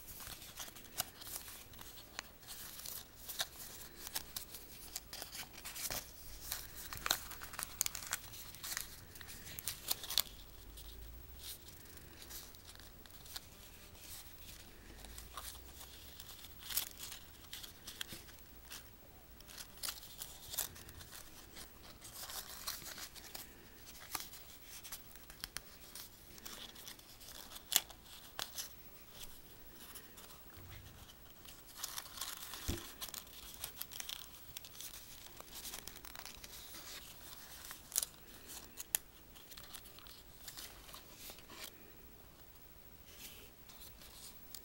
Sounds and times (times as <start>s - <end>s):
Crumpling, crinkling: 0.0s - 42.0s, 43.0s - 44.6s
Inside, small room: 0.0s - 44.6s.